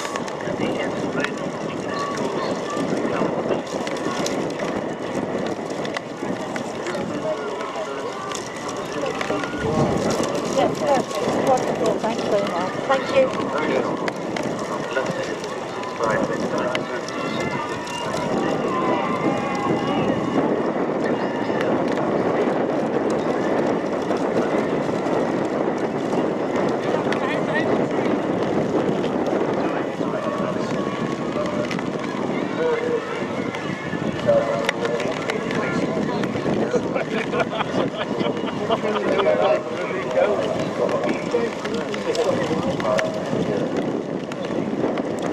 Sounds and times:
Speech: 0.0 - 4.8, 6.6 - 20.3, 29.5 - 44.6
Outside, rural or natural: 0.0 - 45.3
Run: 0.0 - 45.3.

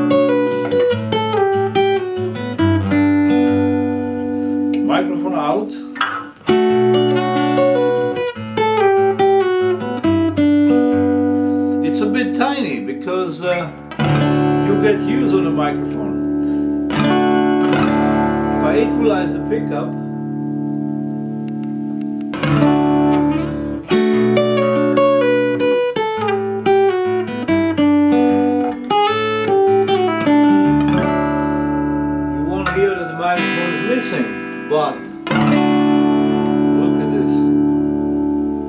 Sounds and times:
Acoustic guitar: 0.0 - 38.6
Strum: 0.0 - 38.6.

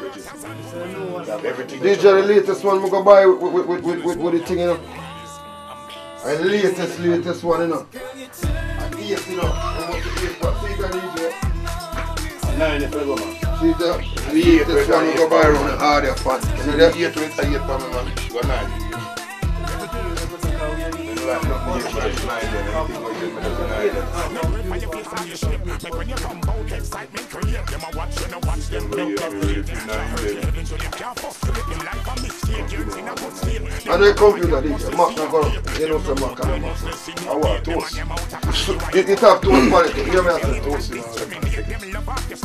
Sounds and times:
Speech: 0.0 - 8.0, 8.8 - 11.4, 12.4 - 19.1, 19.8 - 41.8
Music: 0.0 - 42.4.

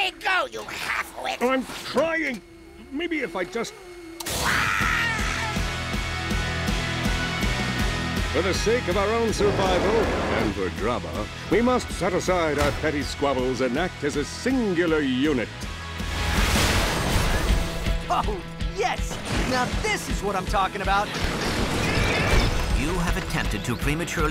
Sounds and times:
Music: 4.7 - 24.3
Speech: 8.4 - 15.5, 22.8 - 24.3.

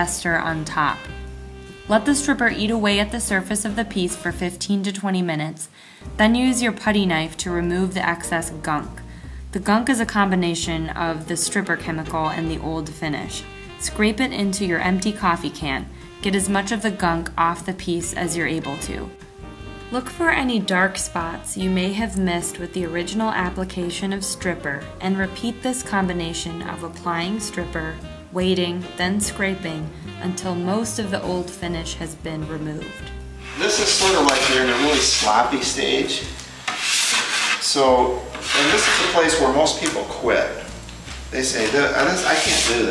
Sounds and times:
Filing (rasp): 33.4 - 35.6, 36.7 - 37.8, 38.4 - 39.4, 42.2 - 42.9
Rub: 33.4 - 35.8, 36.7 - 37.8, 38.4 - 39.4, 42.2 - 42.9.

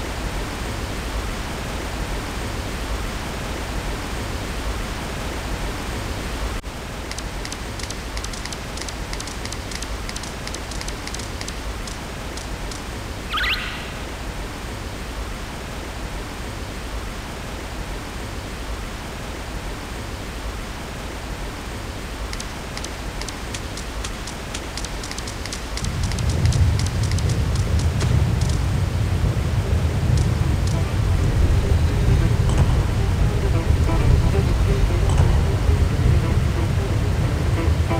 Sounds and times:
Music: 30.7 - 38.0.

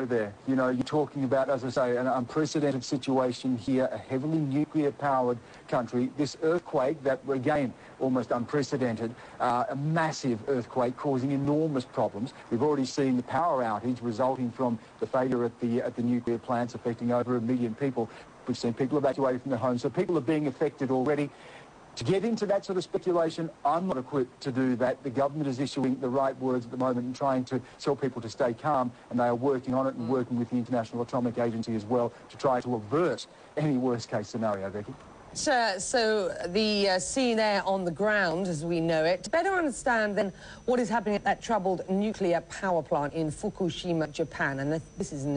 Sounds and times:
Speech: 22.0 - 45.3.

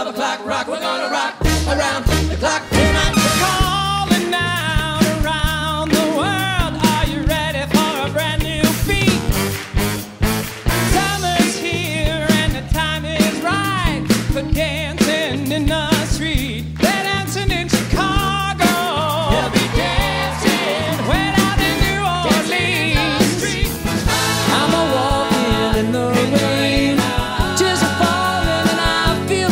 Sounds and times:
Music: 0.0 - 29.5.

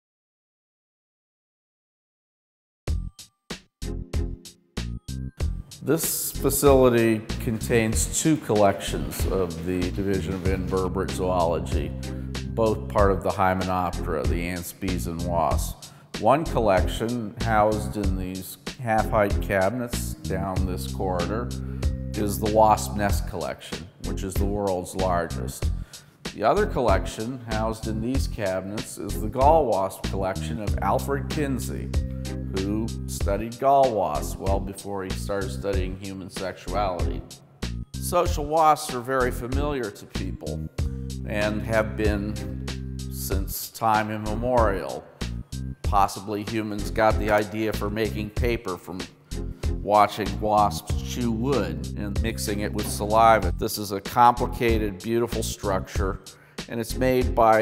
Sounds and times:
Music: 2.9 - 57.6
Speech: 5.8 - 12.0, 12.6 - 21.5, 22.2 - 25.7, 26.4 - 31.9, 32.5 - 37.3, 38.0 - 40.7, 41.3 - 42.5, 43.2 - 45.1, 45.9 - 49.1, 49.8 - 57.6.

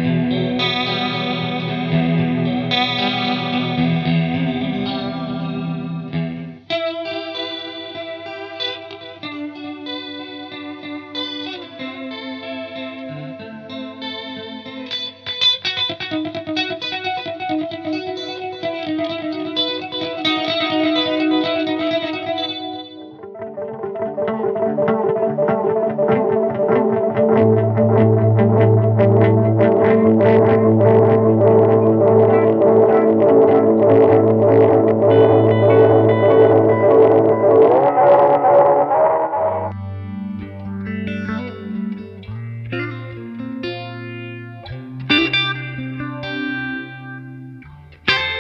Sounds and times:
Distortion: 0.0 - 48.4
Effects unit: 0.0 - 48.4
Guitar: 0.0 - 48.4.

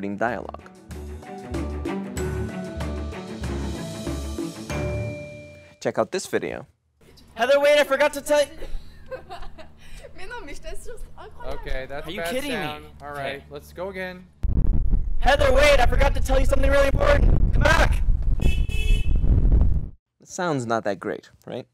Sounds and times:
Speech: 5.8 - 6.7, 15.2 - 18.0, 20.2 - 21.7.

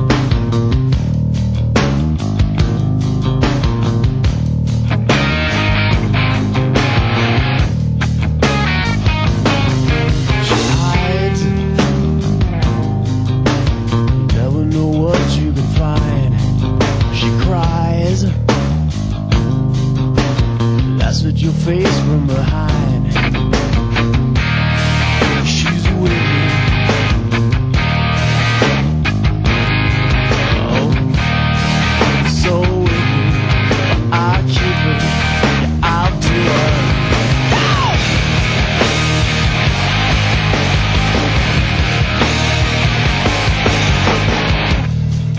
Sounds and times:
Soundtrack music: 0.0 - 14.4, 22.8 - 45.3.

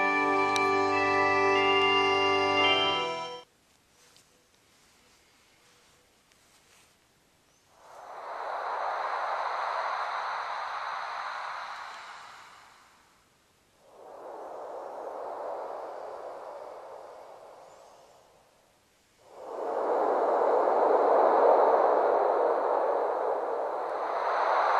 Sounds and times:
Music: 0.0 - 3.4.

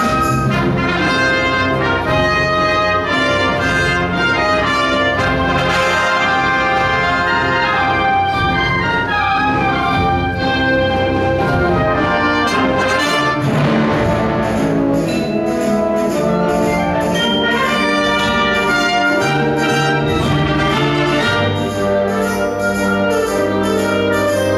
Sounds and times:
Orchestra: 0.0 - 24.5.

